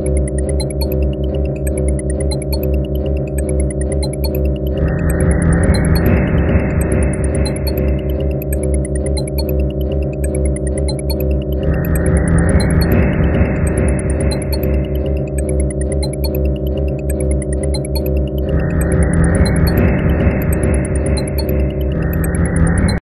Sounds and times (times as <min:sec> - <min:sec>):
Music: 0:00.0 - 0:23.0.